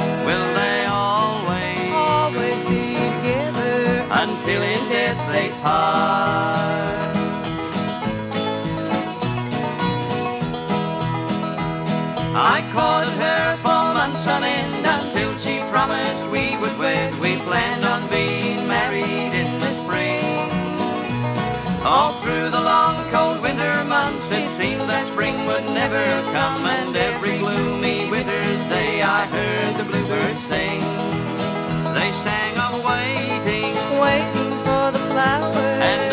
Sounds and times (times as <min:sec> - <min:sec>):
Bluegrass: 0:00.0 - 0:36.1.